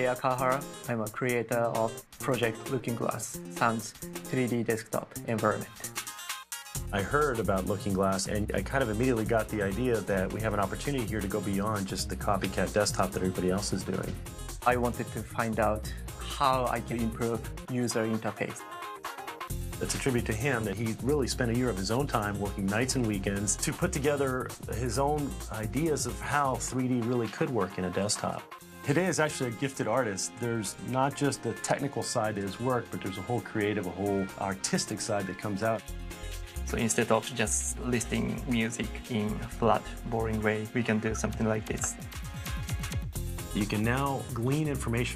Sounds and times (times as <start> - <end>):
Speech: 0.0 - 5.8, 6.9 - 18.7, 19.8 - 35.8, 36.7 - 42.0, 43.6 - 45.1
Music: 0.0 - 45.1.